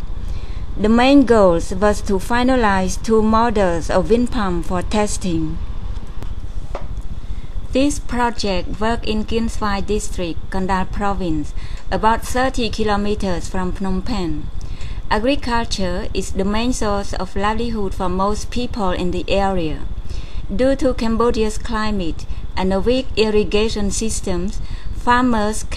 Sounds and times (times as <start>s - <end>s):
Speech: 0.8s - 5.6s, 7.8s - 14.5s, 15.1s - 19.9s, 20.5s - 25.7s.